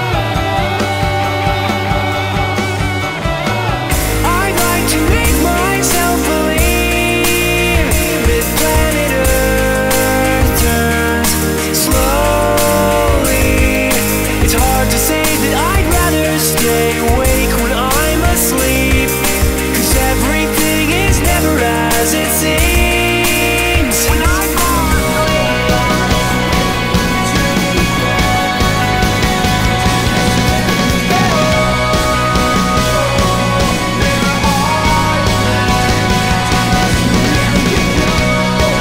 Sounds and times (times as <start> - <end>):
Music: 0.0 - 38.8.